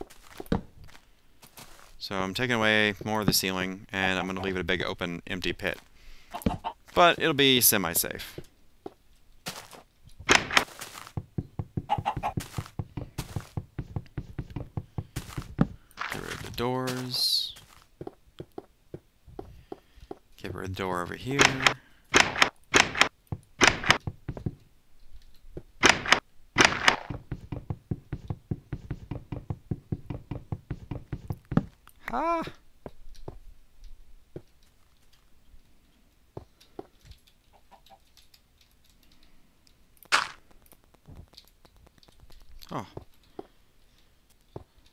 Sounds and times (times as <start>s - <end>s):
Speech: 2.0s - 5.8s, 7.0s - 8.4s, 16.1s - 17.6s, 20.4s - 21.8s, 32.0s - 32.6s, 42.6s - 43.0s.